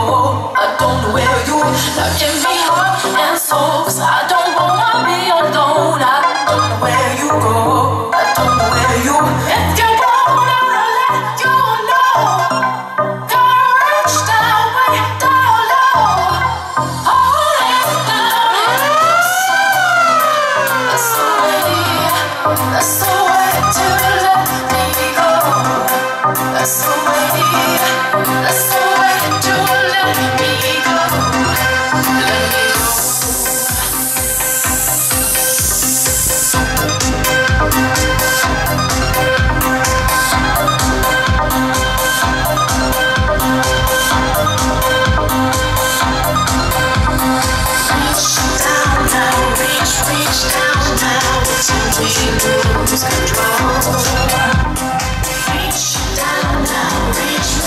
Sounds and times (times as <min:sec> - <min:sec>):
House music: 0:00.0 - 0:57.6.